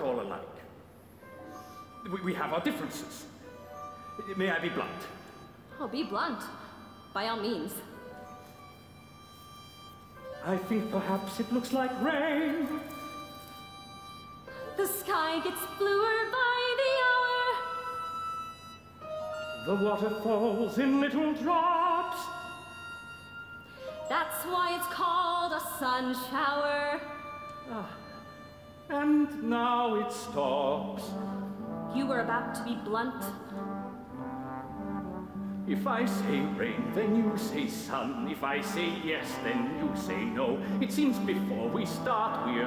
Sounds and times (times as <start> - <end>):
Music: 0.0 - 42.6.